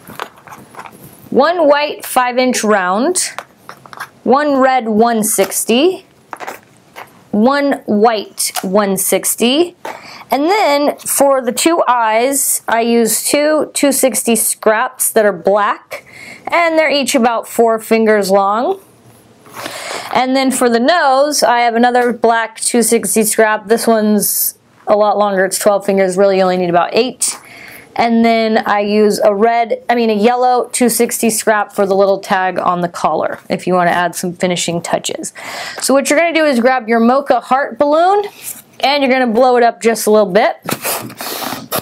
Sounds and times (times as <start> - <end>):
Speech: 1.4 - 3.4, 4.3 - 6.1, 7.4 - 18.8, 20.1 - 27.4, 28.0 - 40.6.